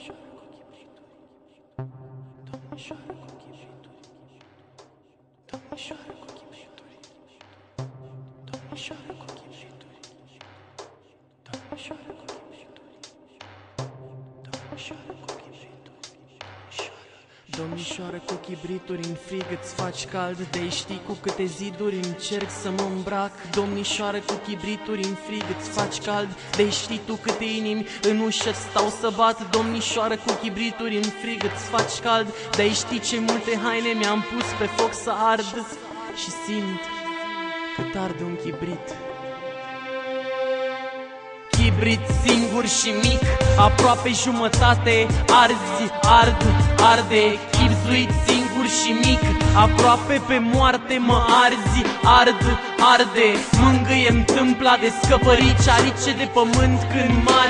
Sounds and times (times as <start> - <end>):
Music: 0.0 - 57.5.